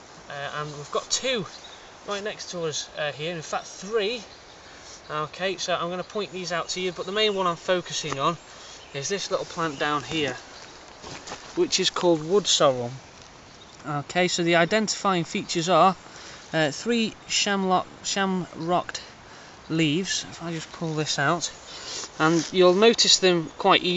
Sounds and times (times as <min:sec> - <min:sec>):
Speech: 0:00.3 - 0:04.3, 0:05.1 - 0:08.4, 0:09.0 - 0:10.4, 0:11.6 - 0:13.0, 0:13.8 - 0:19.1, 0:19.7 - 0:21.6, 0:22.2 - 0:23.9.